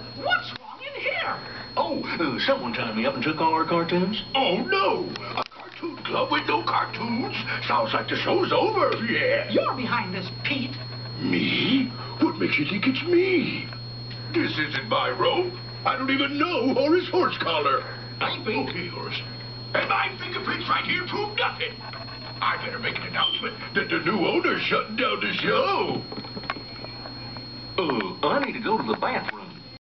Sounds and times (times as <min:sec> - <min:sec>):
Speech: 0:00.2 - 0:13.7, 0:14.3 - 0:21.8, 0:22.4 - 0:26.1, 0:27.8 - 0:29.8.